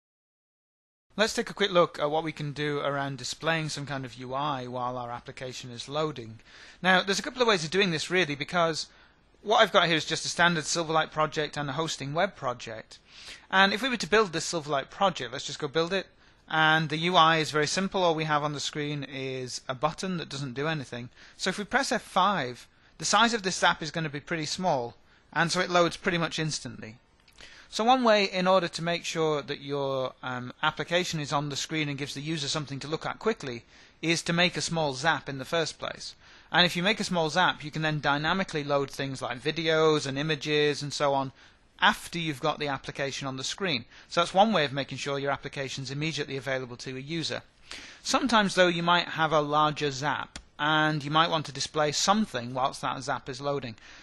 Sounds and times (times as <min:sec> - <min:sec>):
Speech: 0:01.2 - 0:27.0, 0:27.7 - 0:53.8.